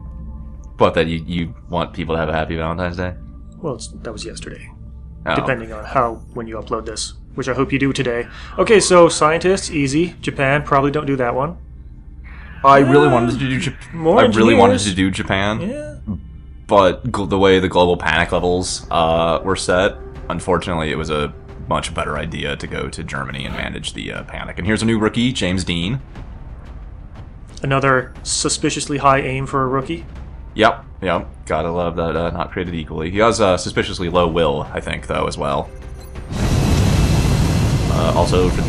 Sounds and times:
Speech: 0:00.8 - 0:04.7, 0:05.3 - 0:11.6, 0:12.6 - 0:26.0, 0:27.6 - 0:35.7, 0:37.9 - 0:38.6.

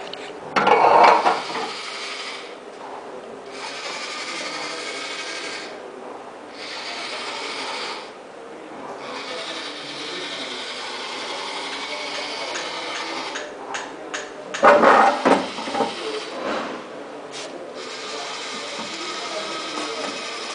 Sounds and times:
Speech: 0:02.8 - 0:20.5.

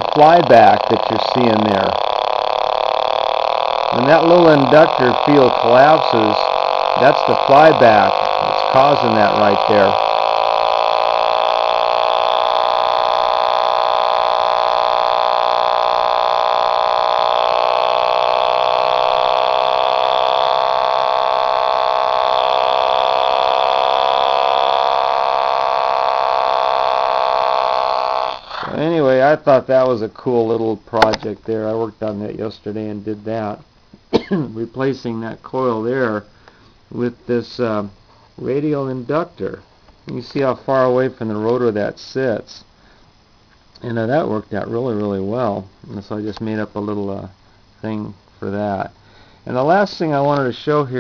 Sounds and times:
Speech: 0:00.2 - 0:02.0, 0:03.9 - 0:10.0, 0:28.7 - 0:33.6, 0:34.4 - 0:36.3, 0:36.9 - 0:42.7, 0:43.8 - 0:51.0.

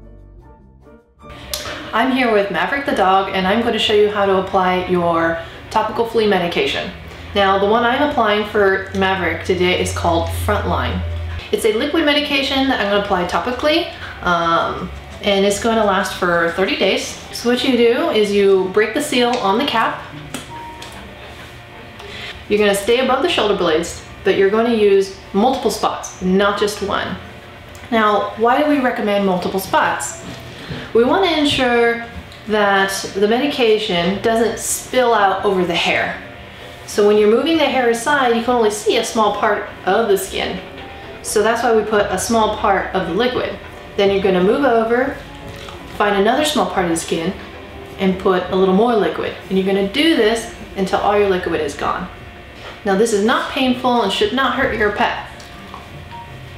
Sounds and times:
Speech: 0:01.6 - 0:20.1, 0:22.5 - 0:27.2, 0:27.9 - 0:30.2, 0:31.0 - 0:36.2, 0:36.9 - 0:40.6, 0:41.3 - 0:45.3, 0:46.0 - 0:47.4, 0:48.0 - 0:52.1, 0:52.8 - 0:55.3.

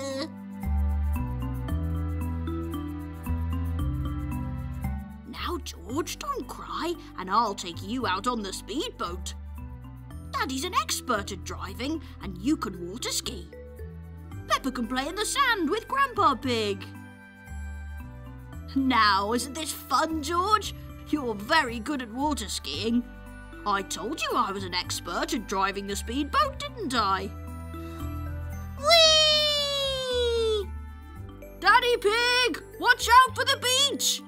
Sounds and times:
Speech: 0:00.0 - 0:00.3, 0:05.3 - 0:09.4, 0:10.4 - 0:13.5, 0:14.5 - 0:16.9, 0:18.7 - 0:23.0, 0:23.7 - 0:27.3, 0:31.6 - 0:34.2
Music: 0:00.0 - 0:34.2.

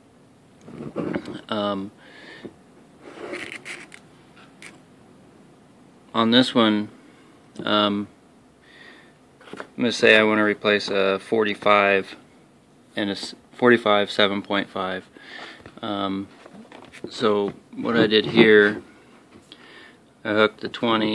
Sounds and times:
Speech: 0:07.6 - 0:08.1, 0:09.8 - 0:12.2, 0:13.0 - 0:15.1, 0:15.8 - 0:16.3, 0:17.1 - 0:18.8, 0:20.2 - 0:21.1.

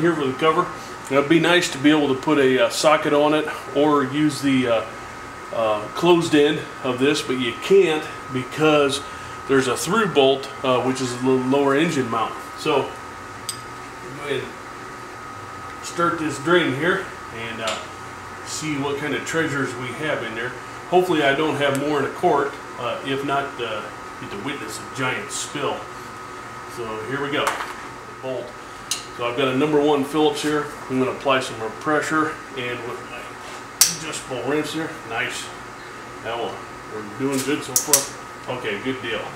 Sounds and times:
Speech: 0:00.0 - 0:04.9, 0:05.5 - 0:13.0, 0:14.0 - 0:14.6, 0:15.8 - 0:17.9, 0:18.5 - 0:25.9, 0:26.7 - 0:27.6, 0:28.2 - 0:28.6, 0:29.2 - 0:33.3, 0:33.9 - 0:35.6, 0:36.2 - 0:39.3.

